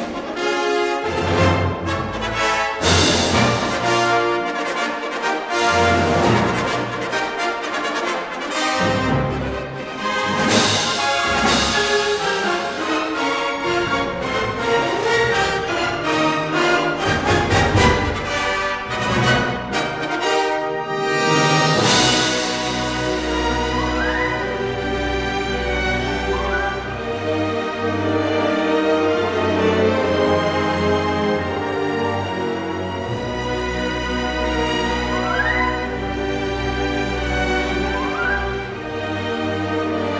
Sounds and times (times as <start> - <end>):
Music: 0.0 - 40.1.